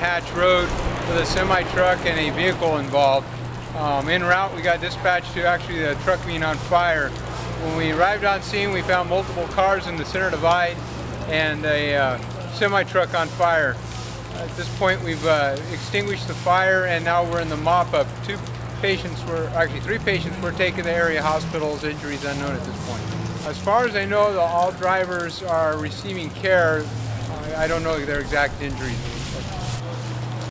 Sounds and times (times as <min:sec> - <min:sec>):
Speech: 0:00.0 - 0:03.2, 0:03.8 - 0:29.9.